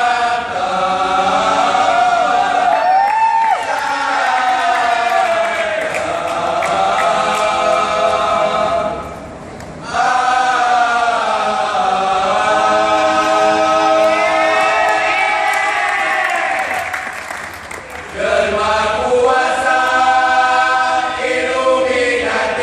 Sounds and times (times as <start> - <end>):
Choir: 0.0 - 9.2, 9.8 - 22.6.